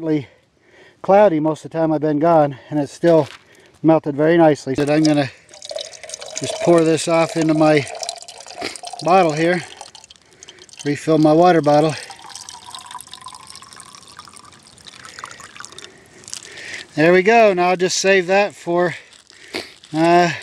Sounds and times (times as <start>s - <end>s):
Water: 4.8s - 16.9s.